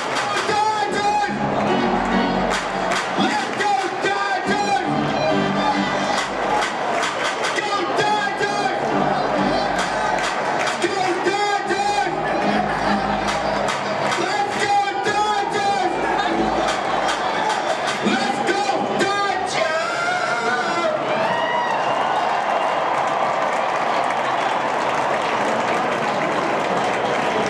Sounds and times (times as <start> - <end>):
Cheering: 0.0 - 27.4
Crowd: 0.0 - 27.4.